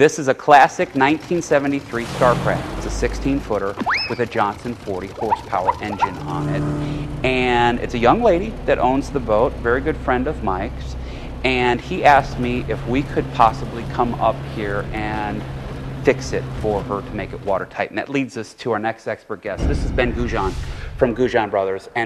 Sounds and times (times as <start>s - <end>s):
Speech: 0.0s - 22.0s
Motorboat, speedboat: 0.8s - 17.8s.